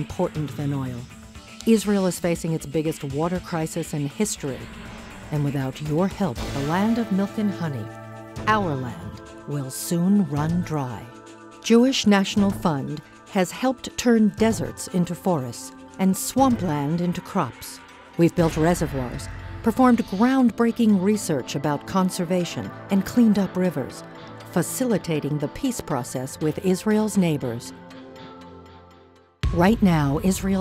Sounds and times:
Speech: 0.0s - 4.7s, 5.3s - 7.9s, 8.5s - 27.8s, 29.5s - 30.6s
Music: 0.0s - 30.6s.

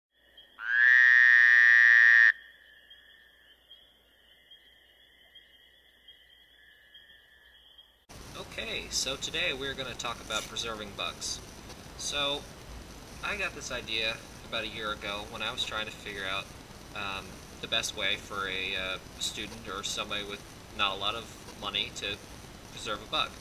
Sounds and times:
Speech: 8.4s - 11.4s, 12.0s - 12.4s, 13.2s - 22.2s, 22.8s - 23.4s.

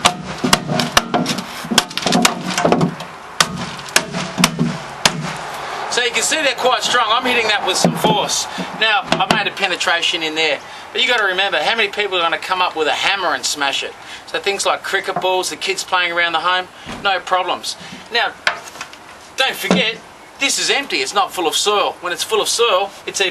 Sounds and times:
Speech: 5.9s - 18.4s, 19.4s - 23.3s.

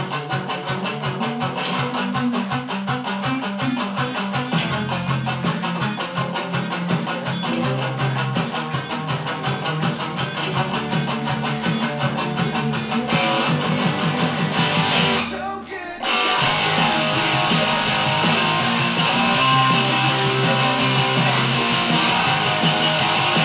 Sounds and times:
Electric guitar: 0.0s - 23.4s.

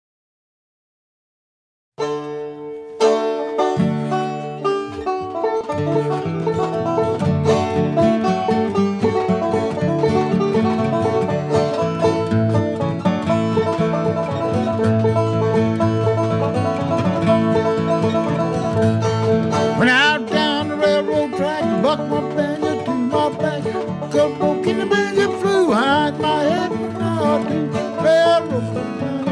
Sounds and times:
Banjo: 2.0s - 29.3s
Bluegrass: 2.0s - 29.3s
Bowed string instrument: 2.0s - 29.3s
Guitar: 2.0s - 29.3s.

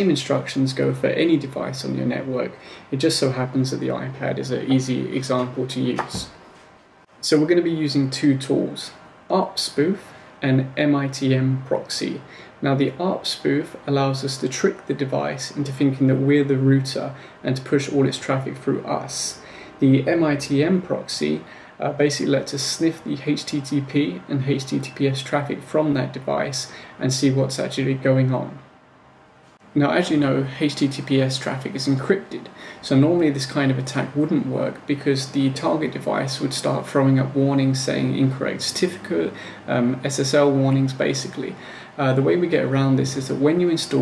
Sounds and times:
Speech: 0.0s - 6.4s, 7.2s - 28.7s, 29.6s - 44.0s.

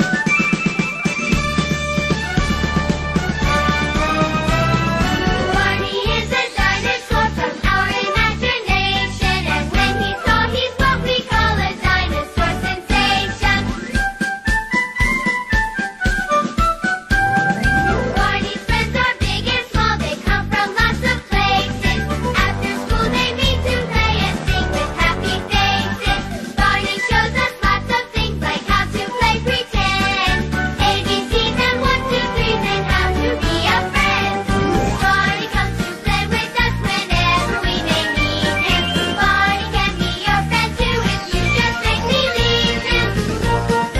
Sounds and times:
Music: 0.0s - 43.9s.

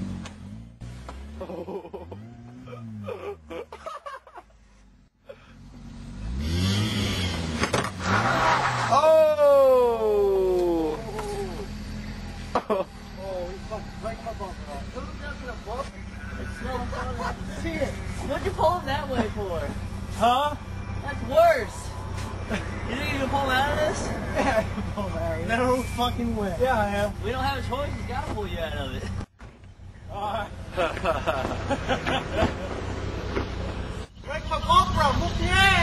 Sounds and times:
Car: 0.0s - 35.8s.

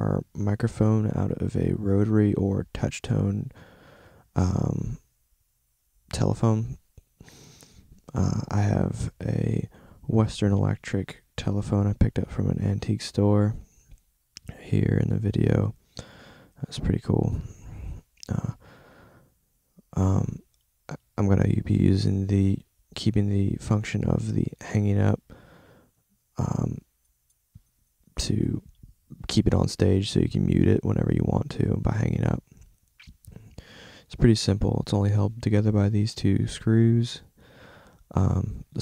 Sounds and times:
Speech: 0.0s - 3.5s, 4.4s - 5.0s, 6.1s - 6.8s, 8.1s - 13.7s, 14.4s - 15.8s, 16.6s - 18.6s, 19.9s - 25.2s, 26.4s - 26.9s, 28.2s - 33.4s, 34.1s - 37.3s, 38.1s - 38.8s.

